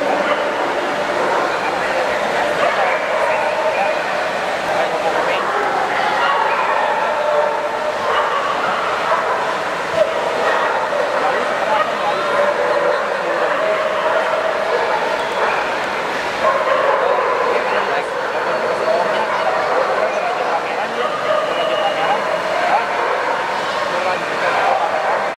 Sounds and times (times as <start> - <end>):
Bow-wow: 0.0 - 4.2, 4.8 - 25.3
Speech: 0.0 - 25.3.